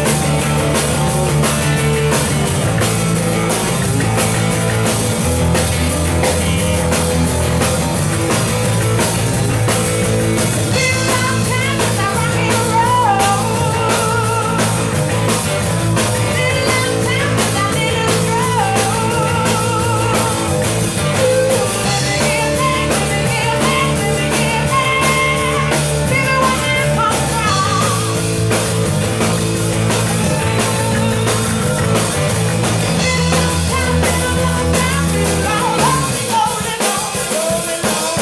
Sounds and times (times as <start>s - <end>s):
Rock and roll: 0.0s - 38.2s.